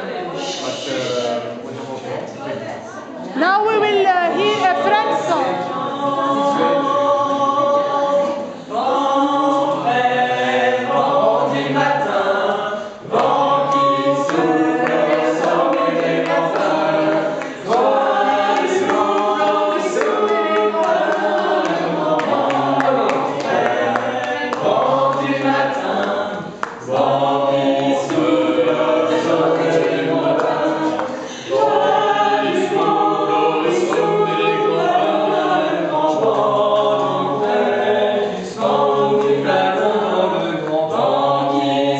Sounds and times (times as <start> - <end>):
Choir: 3.2 - 41.9.